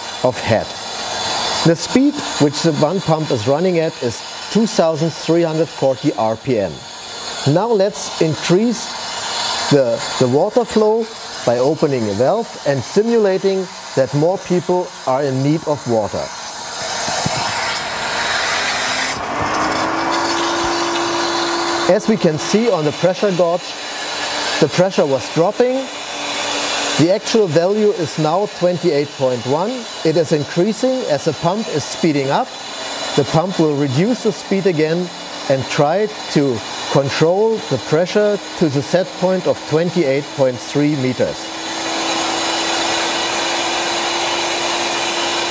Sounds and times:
Speech: 0.2s - 0.7s, 1.6s - 6.8s, 7.5s - 8.9s, 9.7s - 16.3s, 21.9s - 23.7s, 24.6s - 25.9s, 27.0s - 32.5s, 33.2s - 41.5s.

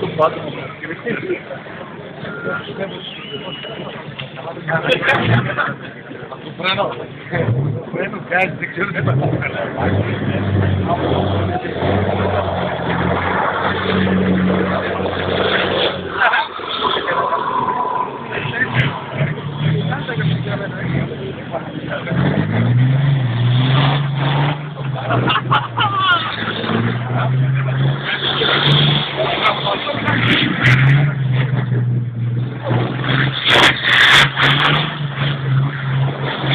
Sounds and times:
Speech: 0.0s - 12.6s, 16.1s - 22.4s, 24.8s - 31.4s
Truck: 0.0s - 36.5s.

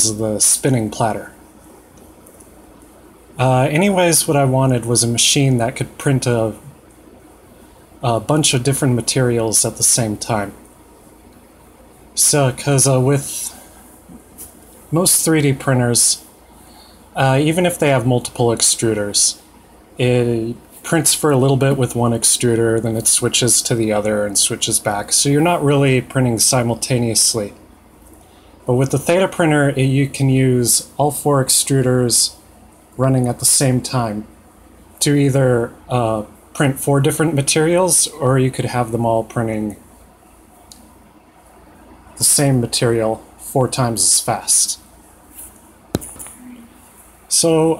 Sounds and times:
Speech: 0.0s - 1.4s, 3.4s - 6.8s, 8.0s - 10.6s, 12.2s - 13.7s, 14.9s - 16.3s, 17.2s - 27.6s, 28.6s - 32.4s, 33.0s - 34.4s, 35.0s - 39.9s, 42.2s - 44.9s, 46.3s - 47.7s.

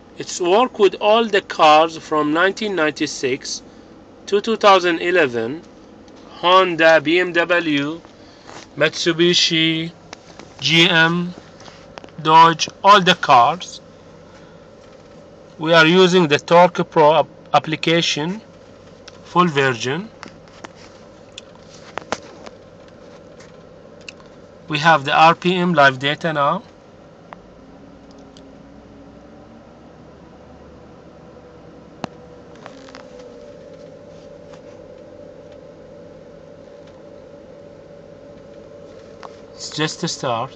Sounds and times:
Speech: 0.2s - 3.6s, 4.3s - 5.7s, 6.3s - 8.0s, 8.8s - 10.0s, 10.6s - 11.4s, 12.2s - 13.8s, 15.6s - 18.4s, 19.3s - 20.1s, 24.7s - 26.7s, 39.6s - 40.5s.

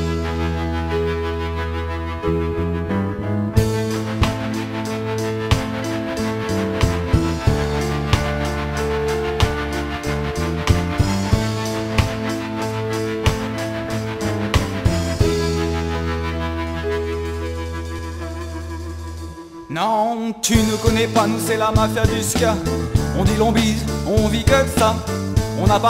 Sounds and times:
Music: 0.0s - 25.9s.

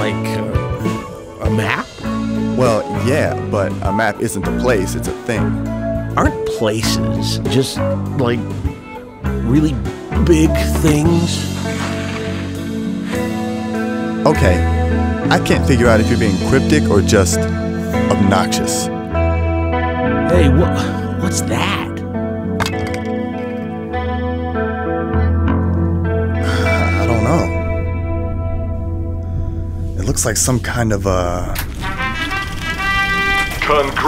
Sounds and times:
Speech: 0.0s - 1.9s, 2.6s - 5.6s, 6.2s - 8.5s, 9.4s - 11.5s, 14.2s - 14.7s, 15.3s - 18.9s, 20.3s - 22.0s, 27.0s - 27.6s, 30.0s - 31.6s, 33.6s - 34.0s
Effects unit: 0.0s - 30.1s
Music: 0.0s - 34.0s.

